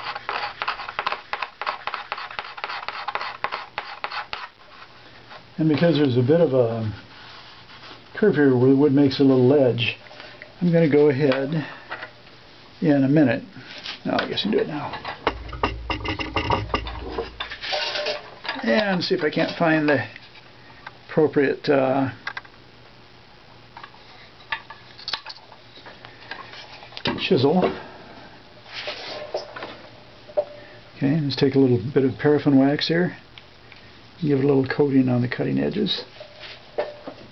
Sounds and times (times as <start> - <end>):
Speech: 5.6 - 7.0, 8.2 - 10.0, 10.6 - 11.7, 12.8 - 15.0, 18.6 - 20.2, 21.1 - 22.2, 27.1 - 27.8, 31.0 - 33.2, 34.2 - 36.1.